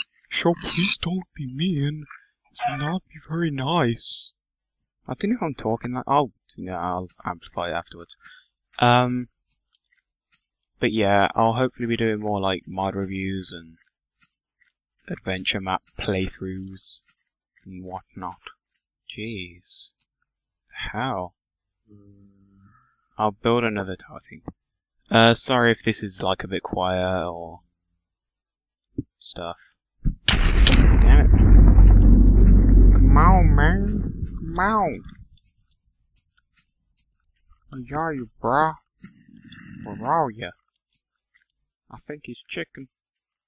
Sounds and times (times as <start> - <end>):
Outside, rural or natural: 0.0 - 20.7, 29.8 - 43.4
Speech: 0.3 - 4.4, 5.0 - 8.2, 8.8 - 9.3, 10.8 - 13.8, 15.0 - 20.0, 20.7 - 22.1, 23.2 - 27.6, 29.1 - 29.8, 33.0 - 35.2, 37.7 - 38.8, 39.6 - 40.6, 41.9 - 42.9.